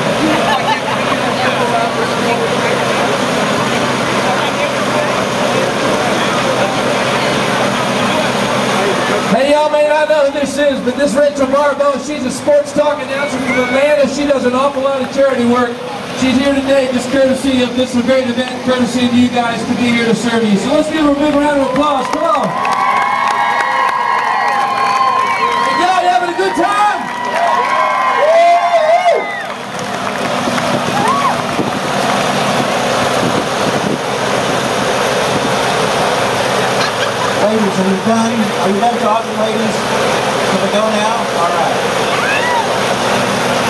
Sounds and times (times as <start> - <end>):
Speech: 8.0 - 22.5.